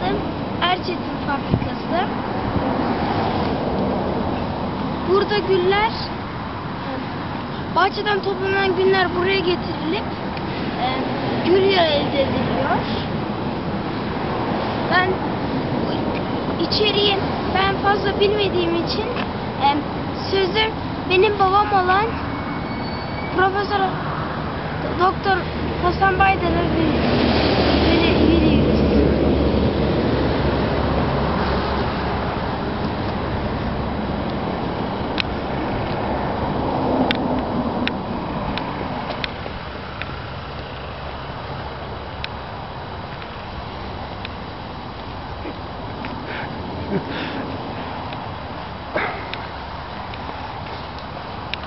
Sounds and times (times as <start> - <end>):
Speech: 0.0 - 2.1, 5.1 - 6.1, 7.8 - 10.1, 10.8 - 13.1, 14.9 - 15.2, 16.6 - 22.2, 23.4 - 24.0, 24.8 - 27.0, 27.9 - 29.0.